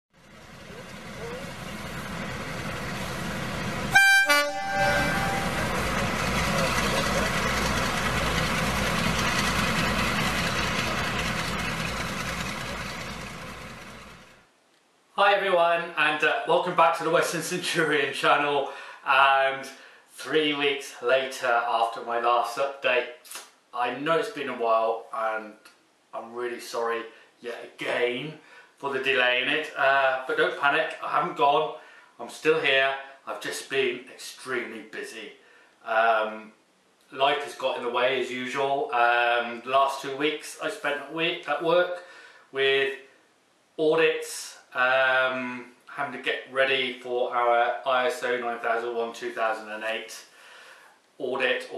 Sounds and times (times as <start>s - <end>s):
Train: 0.2s - 14.4s.